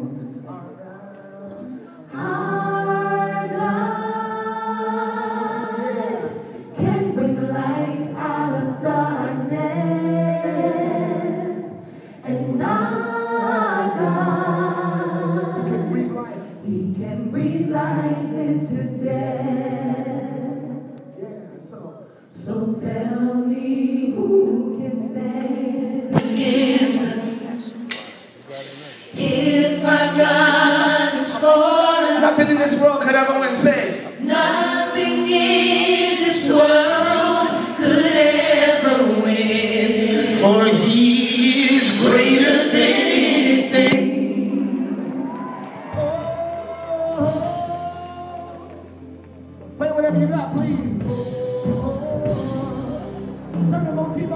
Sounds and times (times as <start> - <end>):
Choir: 1.5 - 21.1, 22.3 - 27.9, 28.6 - 33.0, 33.8 - 48.9.